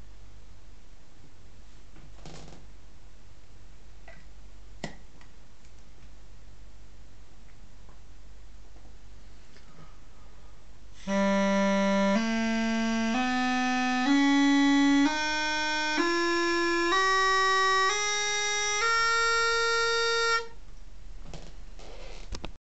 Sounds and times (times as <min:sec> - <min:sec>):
Music: 0:11.0 - 0:20.6.